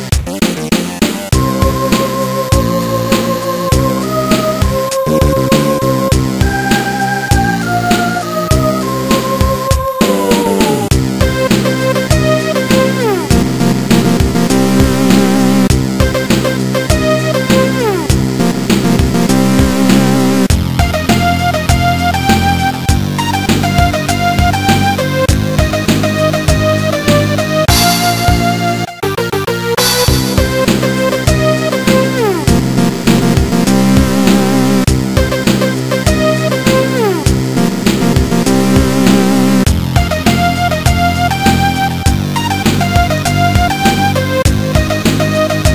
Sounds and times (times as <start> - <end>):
Video game music: 0.0 - 45.7
Soundtrack music: 0.3 - 45.7
Theme music: 1.4 - 44.5.